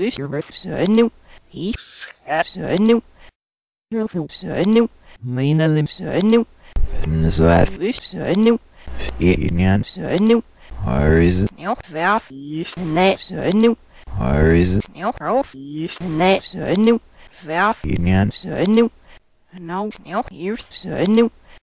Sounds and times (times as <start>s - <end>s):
Speech synthesizer: 0.0s - 3.0s, 3.9s - 18.9s, 19.5s - 21.3s.